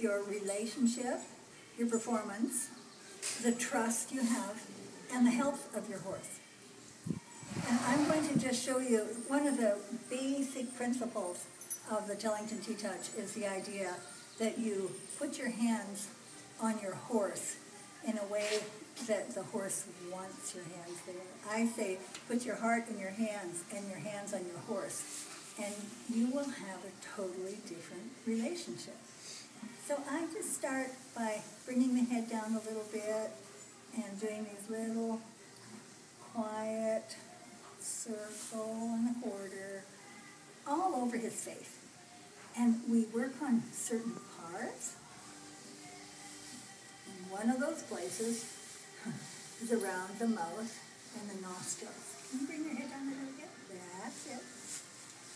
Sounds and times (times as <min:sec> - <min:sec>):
Speech: 0:07.6 - 0:29.0, 0:36.3 - 0:37.2, 0:47.1 - 0:48.6, 0:49.6 - 0:54.6.